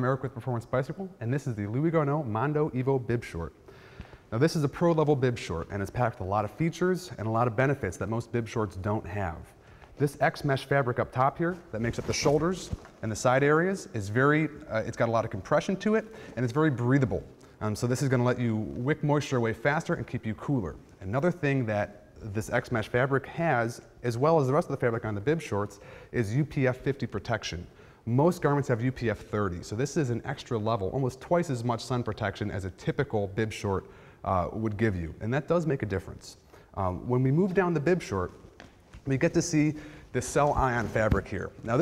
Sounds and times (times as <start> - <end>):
Speech: 0.0 - 3.6, 4.3 - 38.4, 39.0 - 41.8.